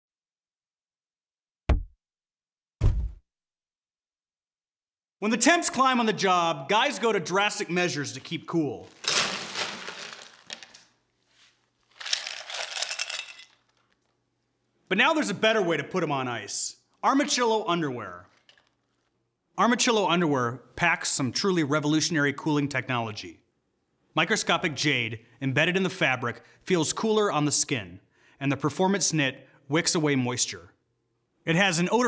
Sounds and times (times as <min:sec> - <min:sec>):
Speech: 0:05.2 - 0:08.9, 0:14.9 - 0:18.3, 0:19.6 - 0:23.4, 0:24.2 - 0:30.8, 0:31.4 - 0:32.0.